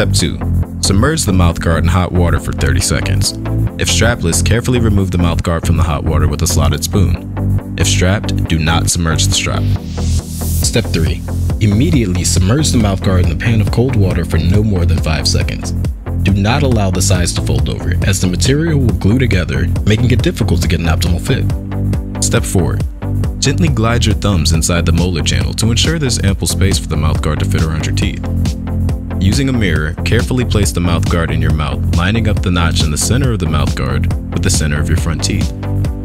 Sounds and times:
Speech: 0.0 - 7.2, 7.8 - 9.8, 10.6 - 21.5, 22.2 - 28.2, 29.2 - 35.5
Music: 0.0 - 36.0.

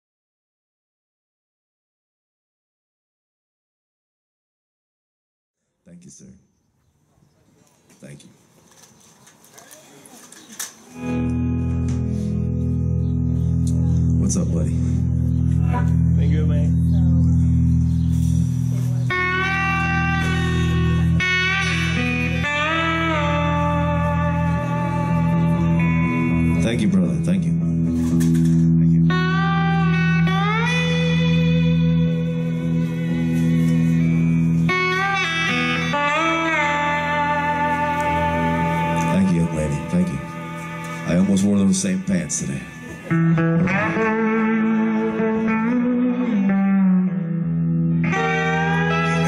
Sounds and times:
Speech: 5.8 - 6.4, 8.0 - 8.4, 14.2 - 14.8, 15.6 - 17.4, 26.6 - 27.6, 39.0 - 40.3, 41.1 - 42.8
Music: 11.0 - 49.2.

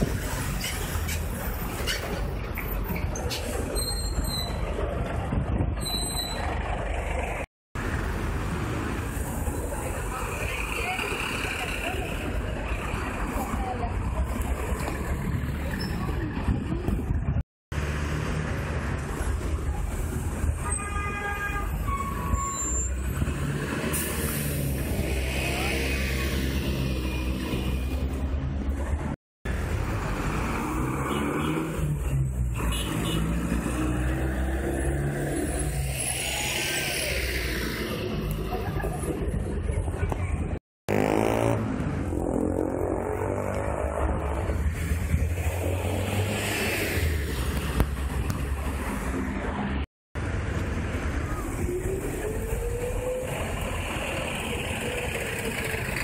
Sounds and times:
Bus: 0.0 - 56.0.

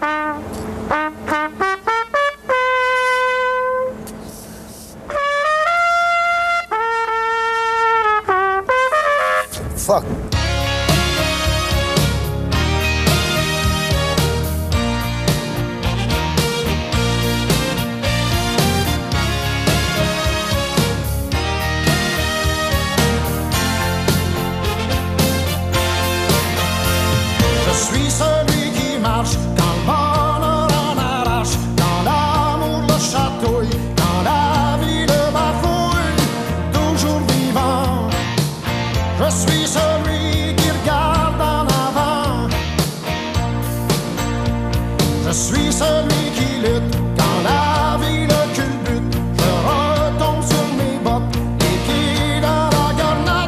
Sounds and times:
Wind instrument, woodwind instrument: 0.0 - 4.4, 5.0 - 9.6, 10.4 - 15.2, 15.8 - 27.8.

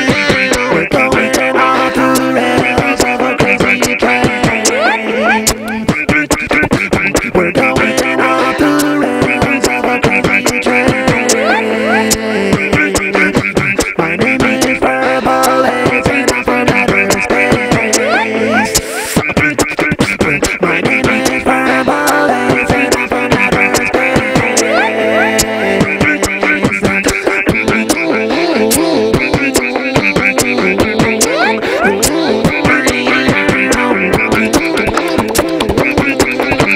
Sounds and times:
Beatboxing: 0.0 - 36.7.

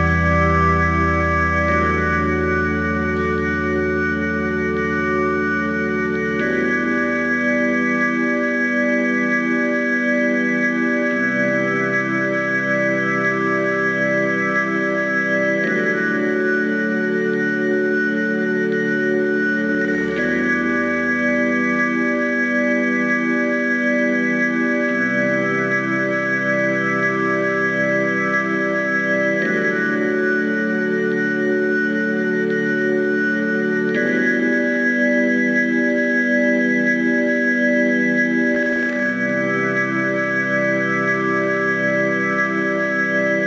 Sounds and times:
Music: 0.0 - 43.4.

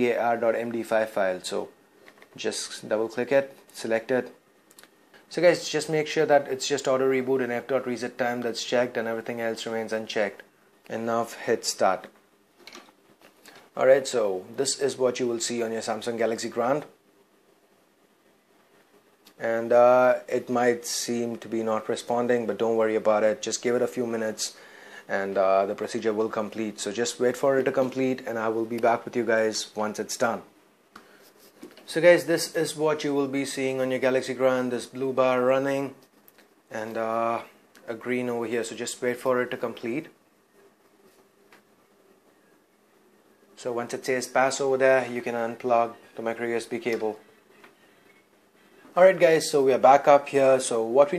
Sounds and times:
Speech: 0.0 - 1.8, 2.4 - 4.4, 5.3 - 12.2, 13.8 - 17.0, 19.3 - 30.5, 31.8 - 36.0, 36.7 - 40.2, 43.6 - 47.2, 48.9 - 51.1
Inside, small room: 0.0 - 51.1.

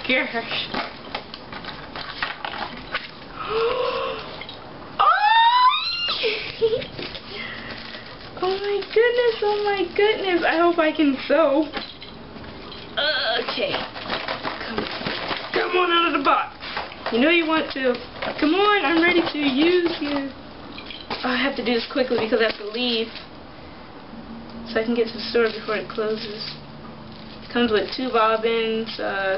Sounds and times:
Speech: 0.0 - 0.8, 8.4 - 11.8, 13.0 - 13.8, 15.5 - 20.4, 21.2 - 23.2, 24.7 - 26.6, 27.5 - 29.3
Inside, small room: 0.0 - 29.3.

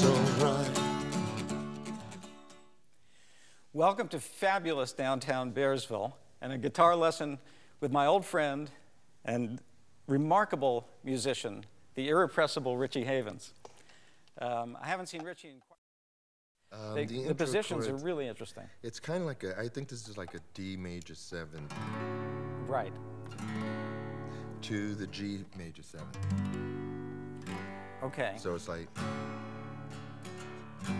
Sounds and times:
Speech: 16.8 - 21.7, 24.6 - 26.1.

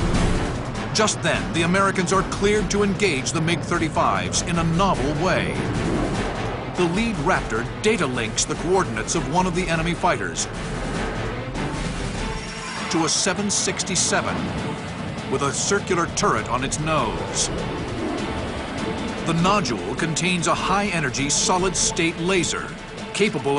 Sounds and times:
Music: 0.0 - 23.5
Speech: 1.0 - 5.6, 6.8 - 10.5, 12.9 - 14.4, 15.3 - 17.5, 19.3 - 23.5.

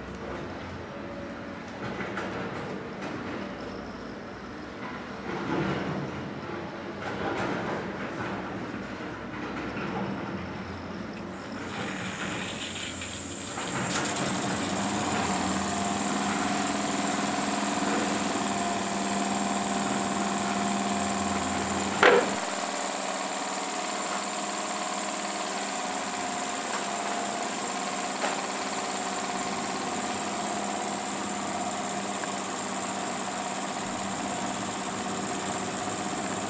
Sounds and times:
Medium engine (mid frequency): 11.3 - 36.5
Idling: 11.4 - 36.5.

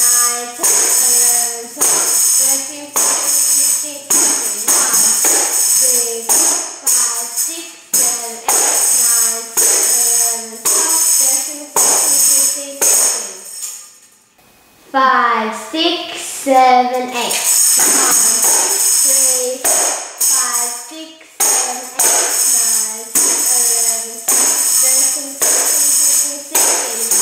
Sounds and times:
Speech: 0.0 - 13.4, 14.9 - 27.2
Tambourine: 0.0 - 13.9, 17.4 - 27.2.

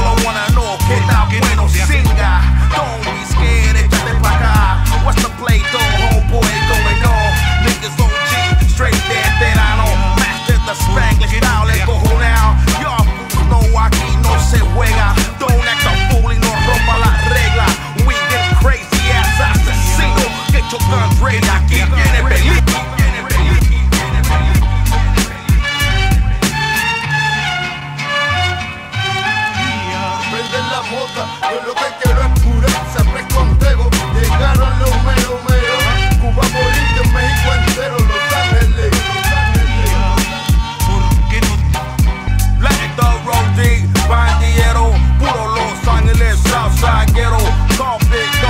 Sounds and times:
Music: 0.0 - 48.4.

